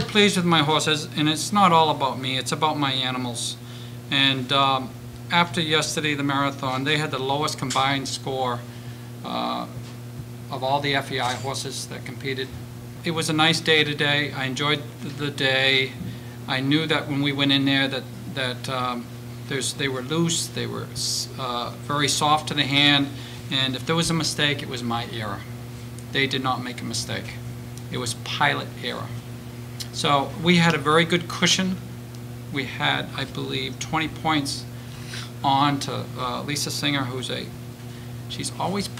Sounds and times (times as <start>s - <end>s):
Speech: 0.0s - 9.8s, 10.5s - 25.5s, 26.1s - 29.2s, 29.8s - 31.8s, 32.5s - 34.7s, 35.4s - 37.6s, 38.3s - 38.9s.